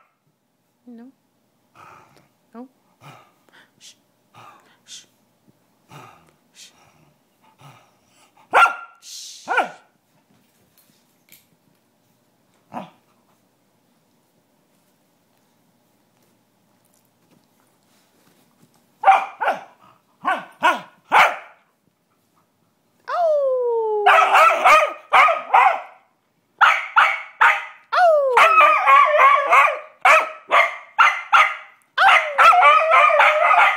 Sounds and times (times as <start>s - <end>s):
Bow-wow: 8.5s - 9.9s, 19.0s - 21.6s, 24.1s - 26.0s, 26.6s - 27.8s, 28.4s - 33.7s
Yip: 8.5s - 9.9s, 19.0s - 21.6s, 24.1s - 26.0s, 26.6s - 33.7s.